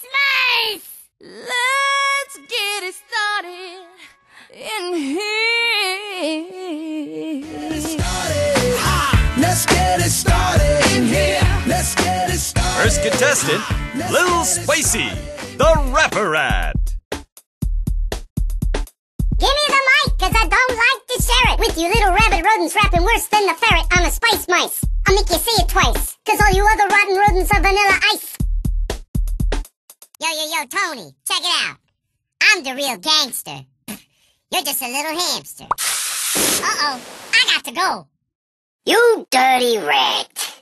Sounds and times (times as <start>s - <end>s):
Music: 7.4s - 30.1s
Speech: 12.8s - 16.8s, 19.4s - 28.4s, 30.2s - 31.8s, 32.4s - 33.6s, 34.5s - 35.7s, 36.6s - 38.0s, 38.9s - 40.6s.